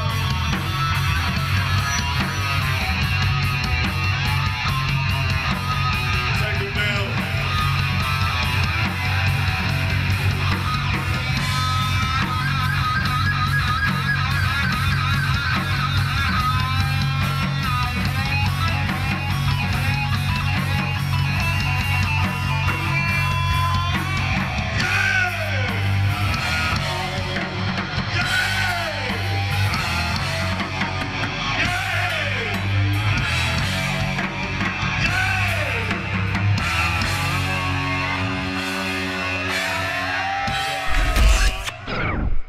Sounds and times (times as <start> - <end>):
Heavy metal: 0.0 - 42.4.